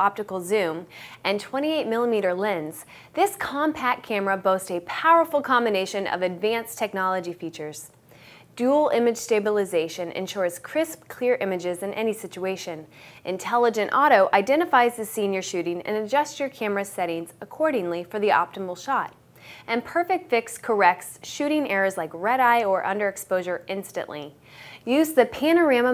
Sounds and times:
Speech: 0.0 - 8.0, 8.6 - 25.9.

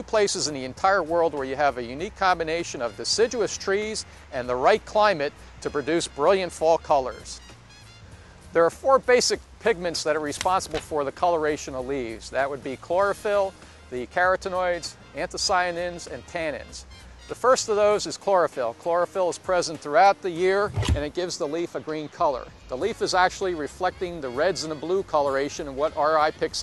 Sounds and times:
Speech: 0.0 - 7.4, 8.6 - 26.6.

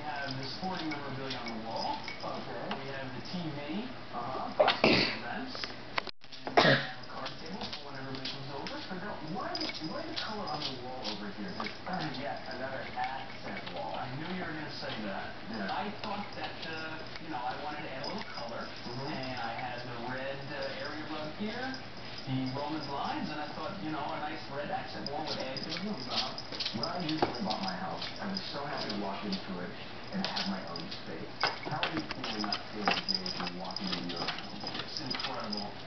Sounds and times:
Speech: 0.0 - 5.7, 6.4 - 35.8.

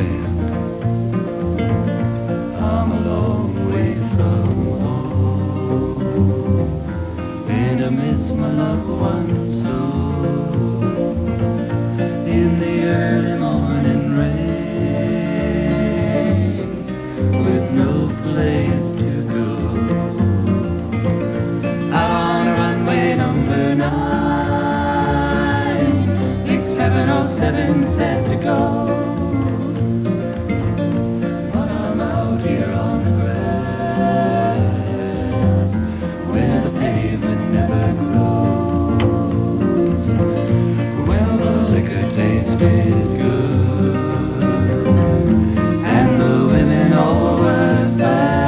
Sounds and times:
Music: 0.0 - 48.4.

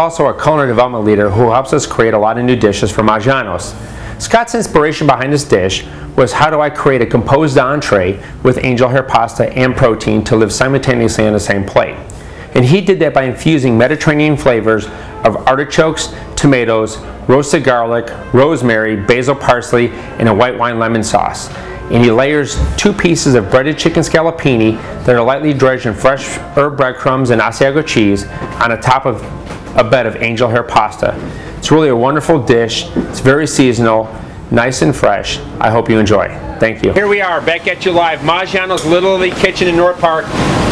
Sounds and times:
Speech: 0.0 - 12.0, 12.6 - 40.3
Music: 0.5 - 34.2.

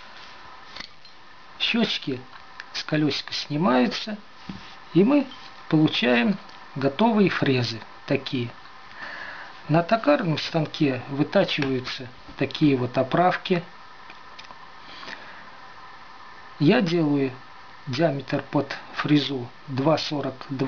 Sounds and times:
Speech: 1.6 - 4.3, 5.0 - 8.6, 9.7 - 13.7, 16.6 - 20.6.

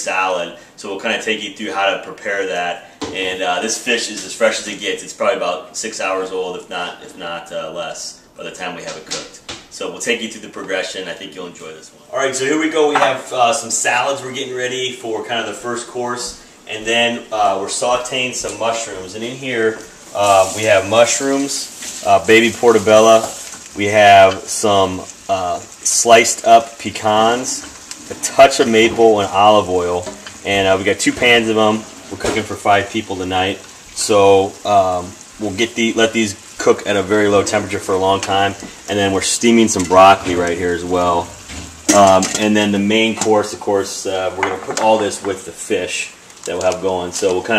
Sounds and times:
Frying (food): 0.0 - 47.5
Inside, small room: 0.0 - 47.5
Speech: 0.0 - 47.5.

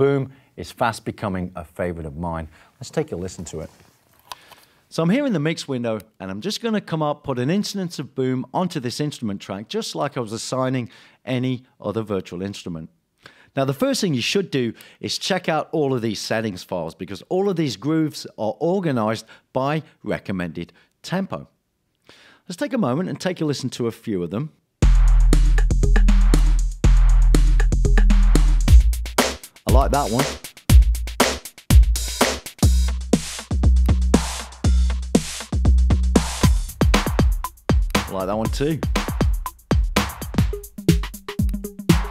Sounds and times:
Speech: 0.0 - 3.8, 4.9 - 13.0, 13.6 - 21.6, 22.5 - 24.6, 29.7 - 30.3, 38.1 - 38.9.

